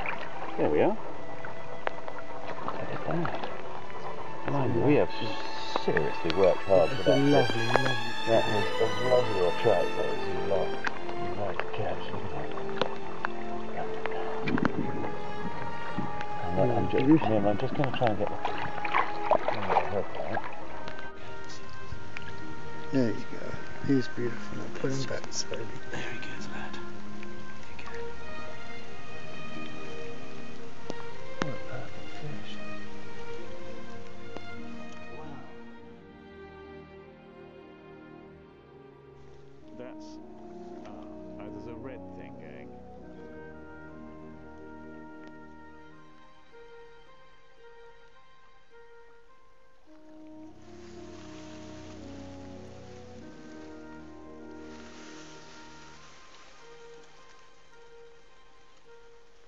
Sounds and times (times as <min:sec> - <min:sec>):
Stream: 0:00.0 - 0:41.5, 0:49.5 - 0:59.4
Music: 0:00.0 - 0:59.4
Speech: 0:04.5 - 0:10.6, 0:11.4 - 0:12.5, 0:16.4 - 0:18.4, 0:19.6 - 0:20.4, 0:23.0 - 0:26.8, 0:39.8 - 0:40.2, 0:40.8 - 0:42.7.